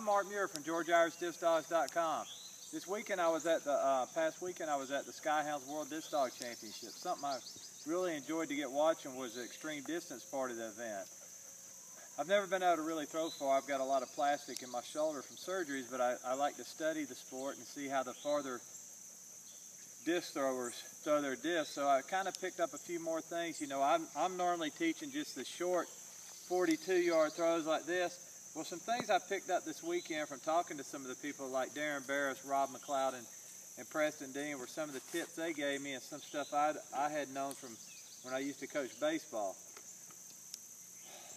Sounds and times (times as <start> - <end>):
Speech: 0.0 - 11.1, 12.2 - 18.6, 20.1 - 25.9, 26.5 - 39.6.